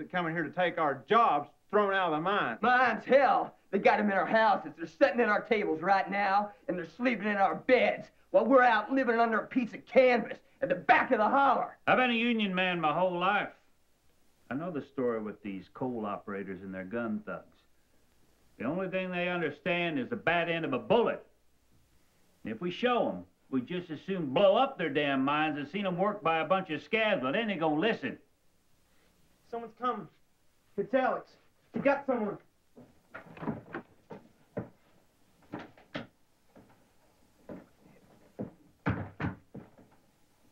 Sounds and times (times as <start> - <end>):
Male speech, man speaking: 0.0 - 13.6, 14.5 - 17.7, 18.6 - 21.3, 22.5 - 28.3, 29.5 - 30.2, 30.8 - 32.5.